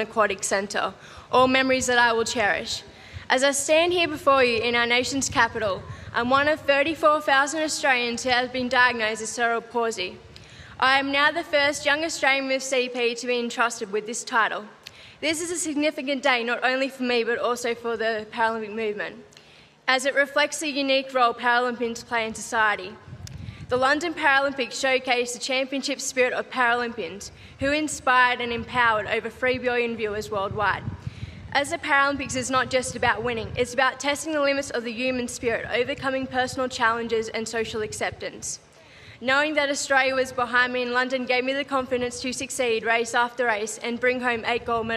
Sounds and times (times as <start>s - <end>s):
Female speech, woman speaking: 0.0s - 10.2s, 10.8s - 19.2s, 19.9s - 23.0s, 23.7s - 30.8s, 31.6s - 38.6s, 39.2s - 44.9s
Narration, monologue: 0.0s - 44.9s.